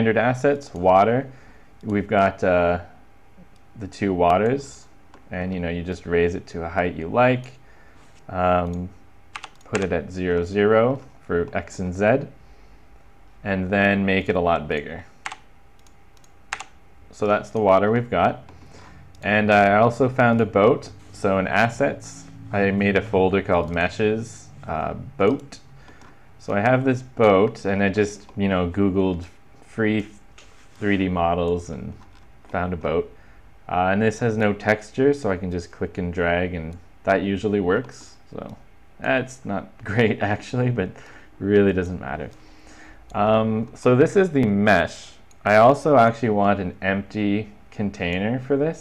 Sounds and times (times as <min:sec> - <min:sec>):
Speech: 0:00.0 - 0:03.0, 0:03.8 - 0:07.6, 0:08.3 - 0:09.0, 0:09.7 - 0:12.4, 0:13.4 - 0:15.1, 0:17.1 - 0:18.5, 0:19.2 - 0:25.7, 0:26.4 - 0:30.2, 0:30.8 - 0:42.4, 0:43.2 - 0:48.8.